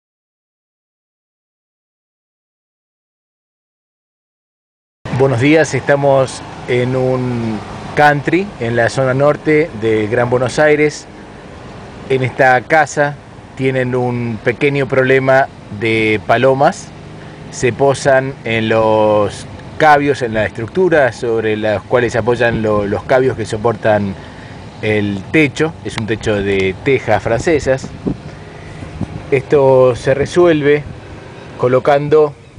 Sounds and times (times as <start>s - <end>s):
Speech: 5.1s - 11.1s, 12.1s - 16.9s, 17.5s - 24.2s, 24.8s - 28.0s, 29.3s - 30.9s, 31.6s - 32.4s.